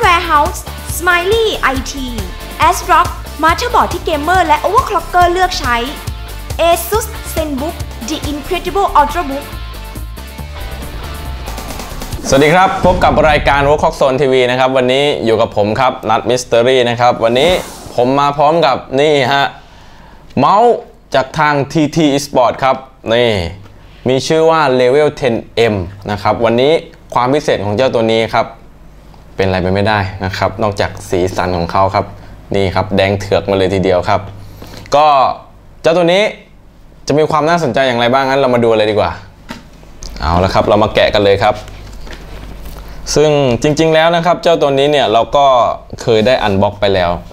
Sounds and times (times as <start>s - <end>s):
Speech: 12.2s - 19.6s, 20.4s - 28.6s, 40.2s - 41.7s, 43.1s - 47.3s.